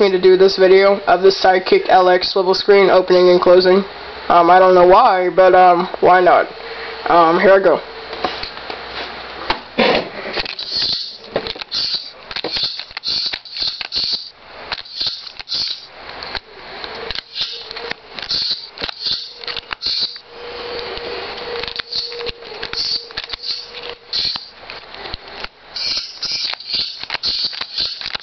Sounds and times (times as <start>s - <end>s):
Speech: 0.0s - 6.5s, 7.1s - 7.9s.